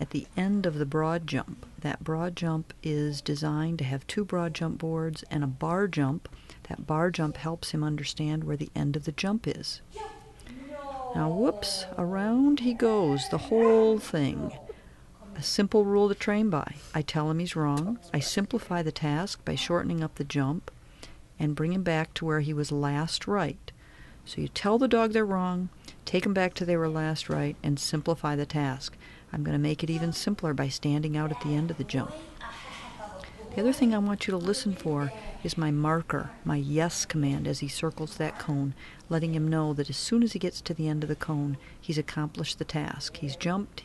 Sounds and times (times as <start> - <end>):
Speech: 0.0 - 20.7, 24.3 - 43.8.